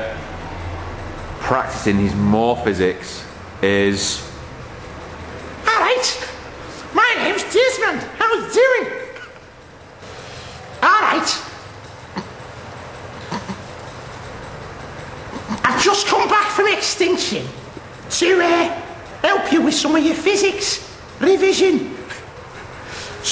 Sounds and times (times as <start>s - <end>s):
Speech: 1.4s - 4.4s, 5.7s - 6.4s, 7.0s - 9.2s, 10.8s - 11.6s, 15.6s - 22.1s.